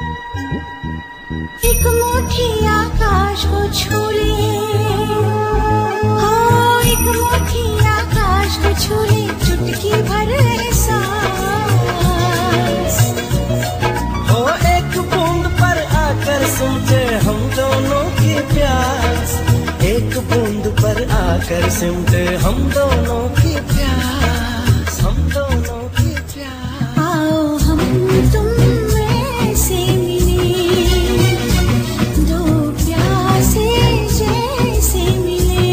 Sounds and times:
Music of Bollywood: 0.0 - 35.7.

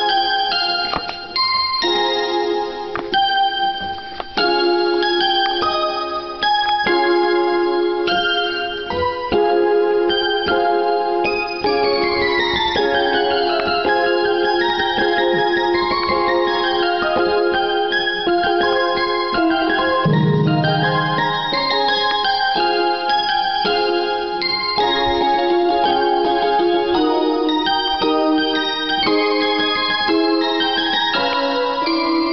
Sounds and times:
Inside, small room: 0.0 - 32.3
Piano: 0.0 - 32.3.

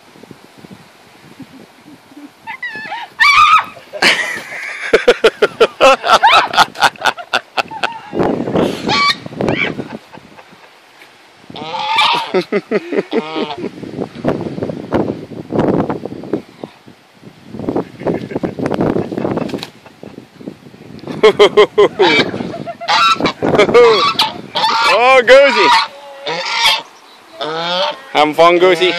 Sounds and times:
Honk: 8.9 - 9.2, 11.6 - 12.4, 13.1 - 13.6, 22.0 - 28.2, 28.8 - 28.9.

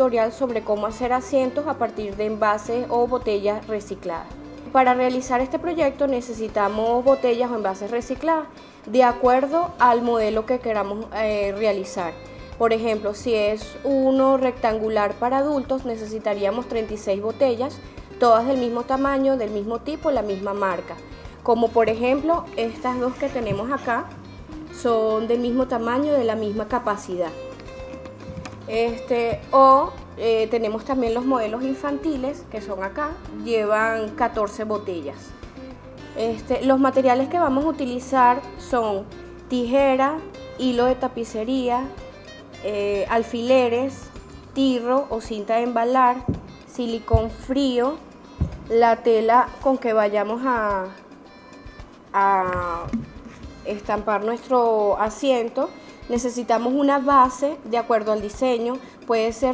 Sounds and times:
Speech: 0.0 - 24.1, 24.8 - 27.4, 28.7 - 35.3, 36.2 - 42.0, 42.6 - 48.0, 48.7 - 51.0, 52.2 - 53.0, 53.7 - 59.5
Music: 0.0 - 59.5.

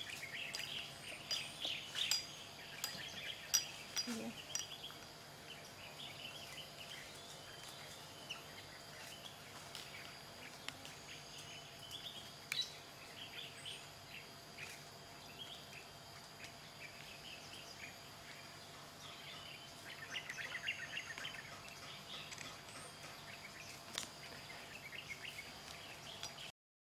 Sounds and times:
Bird: 0.0 - 26.5.

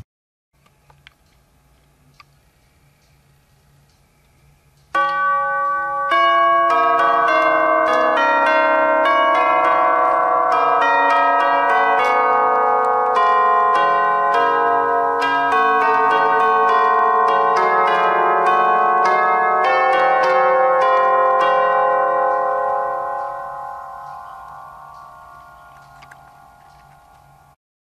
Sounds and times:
Ding-dong: 5.0 - 27.6.

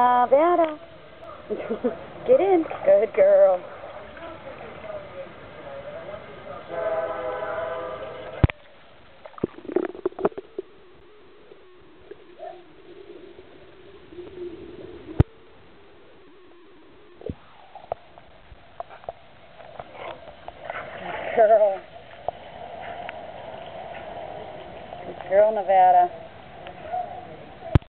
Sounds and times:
Speech: 25.0 - 26.1.

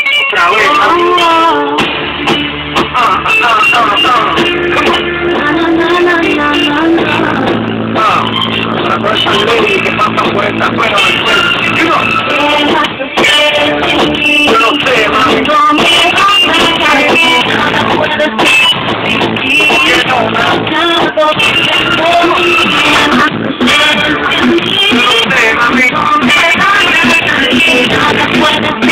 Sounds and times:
Music: 0.0 - 28.9.

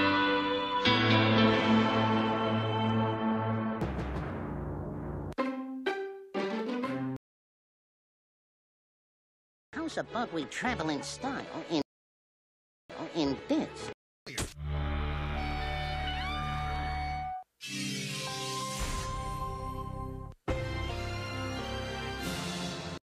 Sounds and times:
Music: 0.0 - 7.2, 9.8 - 11.8, 14.7 - 17.5, 18.2 - 23.0.

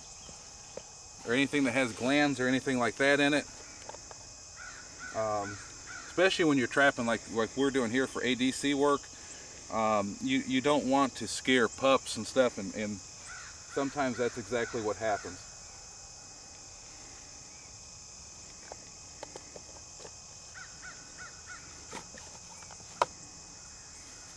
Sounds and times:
Outside, rural or natural: 0.0 - 24.3
Speech: 1.2 - 3.5, 5.2 - 5.6, 6.2 - 9.0, 9.7 - 13.0, 13.8 - 15.4.

